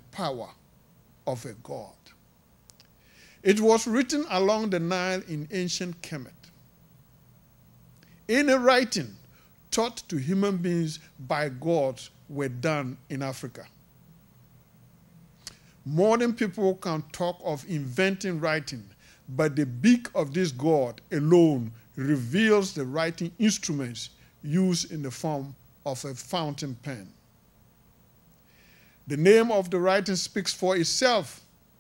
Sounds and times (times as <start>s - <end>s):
Speech: 0.0s - 0.6s, 1.3s - 2.2s, 3.4s - 6.5s, 8.3s - 13.7s, 15.9s - 27.2s, 29.1s - 31.5s.